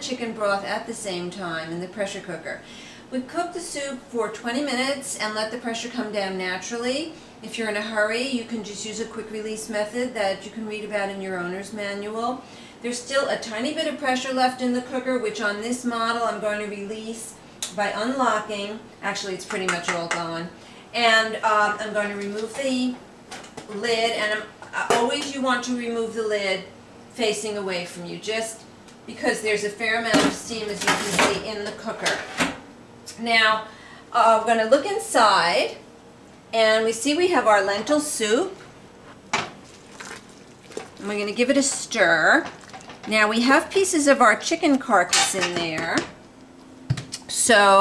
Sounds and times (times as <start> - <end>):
Speech: 0.0 - 23.0, 23.7 - 32.2, 33.1 - 35.8, 36.6 - 38.6, 41.0 - 42.5, 43.1 - 46.1, 47.2 - 47.8.